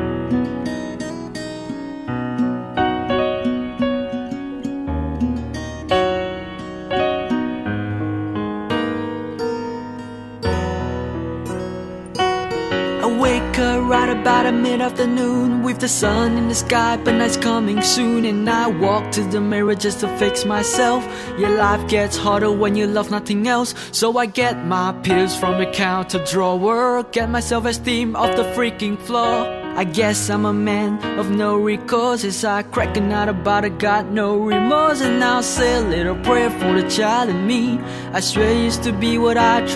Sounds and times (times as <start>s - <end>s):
Music: 0.0s - 39.7s.